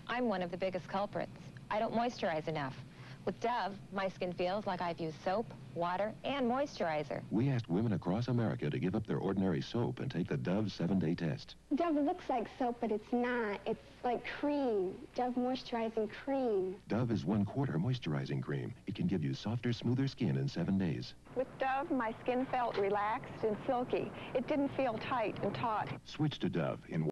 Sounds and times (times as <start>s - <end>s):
Speech: 0.1s - 27.1s.